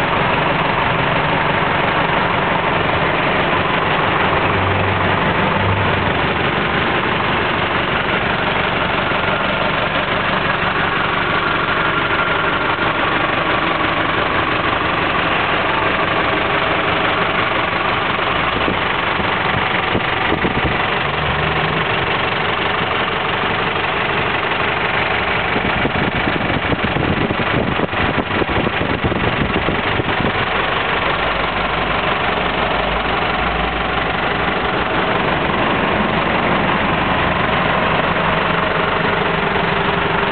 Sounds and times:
Engine: 0.0 - 40.3
Motor vehicle (road): 0.0 - 40.3.

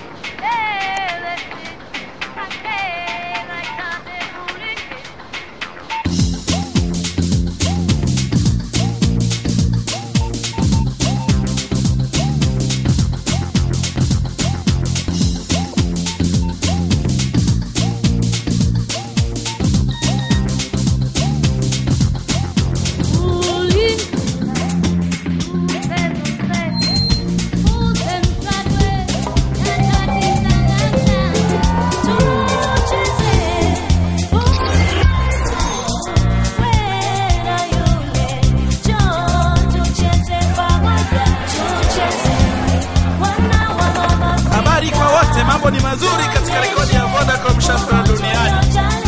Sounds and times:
Music: 0.0 - 49.0.

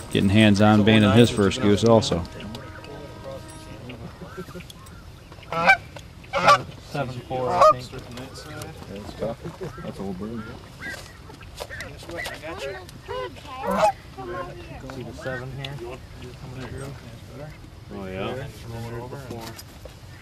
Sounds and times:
Honk: 1.0 - 6.7, 7.3 - 8.5, 9.6 - 14.5.

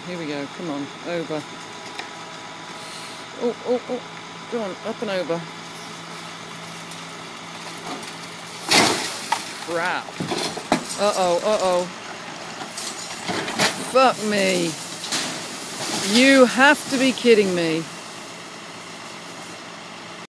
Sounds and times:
Speech: 0.0 - 1.5, 3.4 - 5.5, 9.7 - 10.1, 11.0 - 12.0, 13.8 - 14.8, 16.0 - 17.9
Vehicle: 0.0 - 20.2.

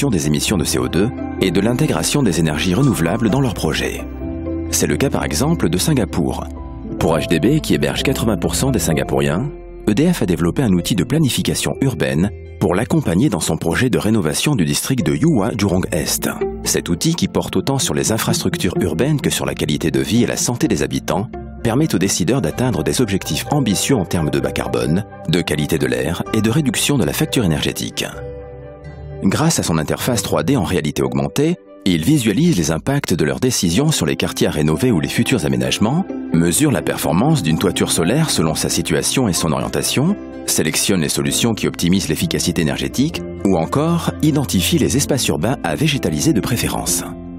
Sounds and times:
Speech: 0.0 - 28.2, 29.2 - 47.2
Music: 0.0 - 47.3.

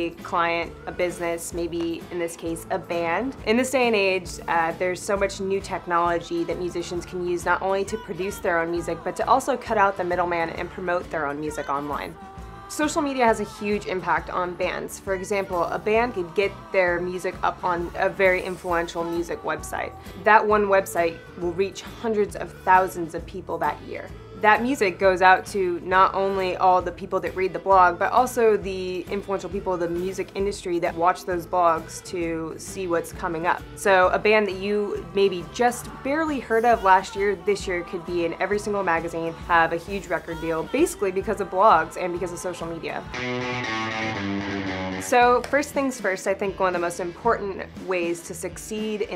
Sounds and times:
Speech: 0.0 - 43.1, 45.1 - 49.1
Music: 0.0 - 49.1.

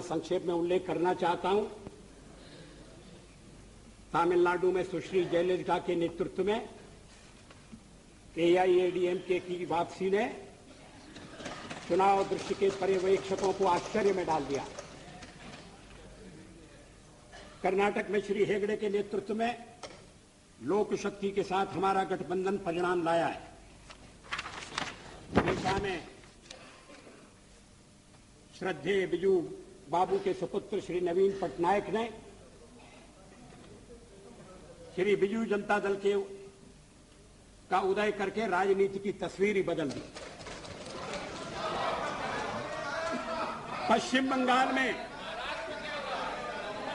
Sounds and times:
Male speech, man speaking: 0.0 - 1.8, 4.1 - 6.8, 8.4 - 10.6, 11.9 - 15.3, 17.6 - 19.7, 20.6 - 23.6, 25.6 - 26.2, 28.5 - 36.5, 37.7 - 40.1, 41.5 - 46.9
Narration, monologue: 0.0 - 46.9.

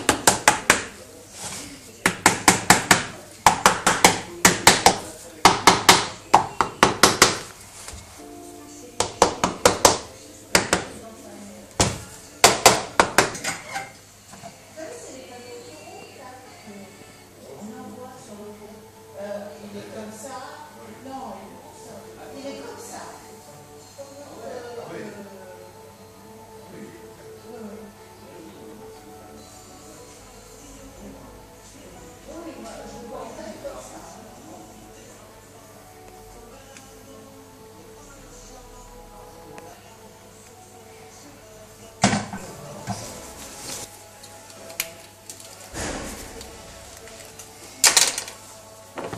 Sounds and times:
Music: 0.0 - 49.1.

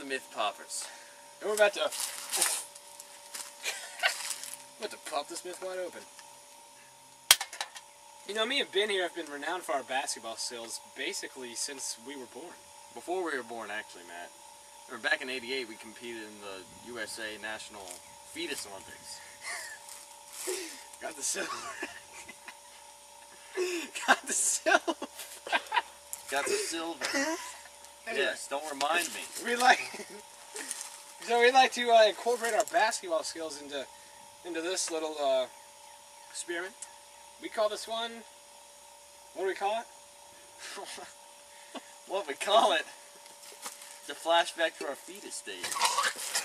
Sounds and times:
Speech: 0.0 - 2.0, 4.8 - 6.1, 8.3 - 14.3, 14.9 - 19.2, 21.0 - 21.6, 26.3 - 27.1, 28.1 - 29.9, 31.2 - 35.5, 36.4 - 36.8, 37.4 - 38.3, 39.4 - 39.9, 42.1 - 43.0, 44.1 - 45.8.

